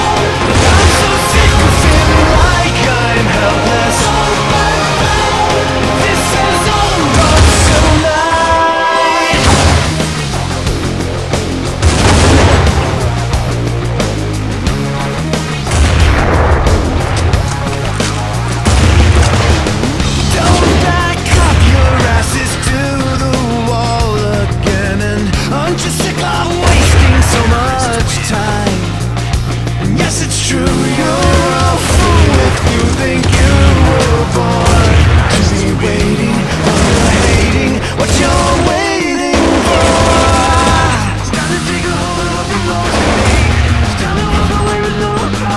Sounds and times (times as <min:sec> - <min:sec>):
Music: 0:00.0 - 0:45.5.